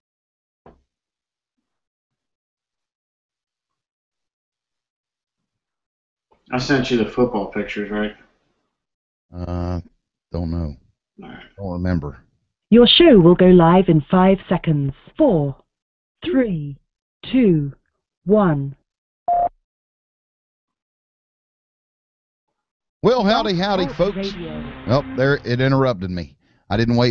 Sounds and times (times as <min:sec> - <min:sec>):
Speech: 0:06.5 - 0:08.2, 0:09.4 - 0:09.8, 0:10.4 - 0:10.8, 0:11.6 - 0:12.2, 0:12.8 - 0:15.6, 0:16.2 - 0:18.8, 0:23.0 - 0:27.1.